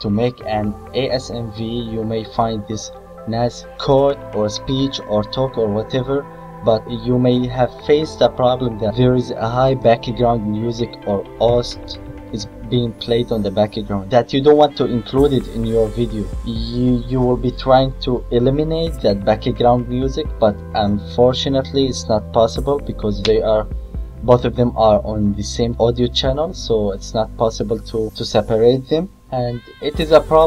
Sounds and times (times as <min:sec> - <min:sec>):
Music: 0:00.0 - 0:30.4
Speech: 0:00.0 - 0:30.4.